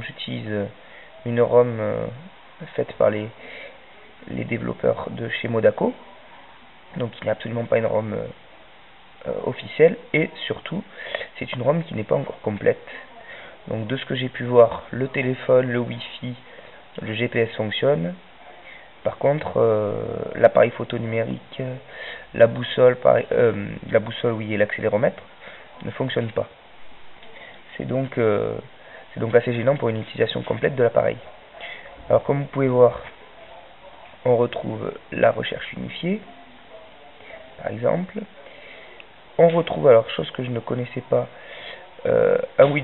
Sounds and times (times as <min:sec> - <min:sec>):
Speech: 0:00.0 - 0:08.4, 0:09.2 - 0:26.6, 0:27.2 - 0:42.8.